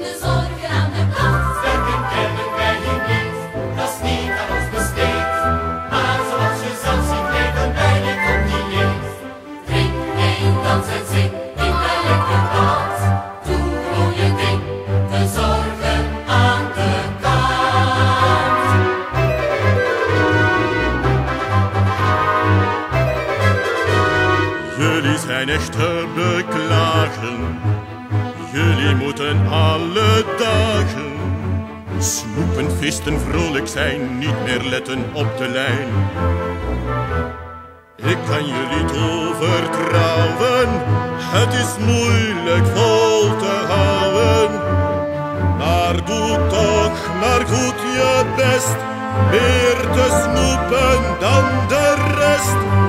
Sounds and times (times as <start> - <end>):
Music: 0.0 - 52.8.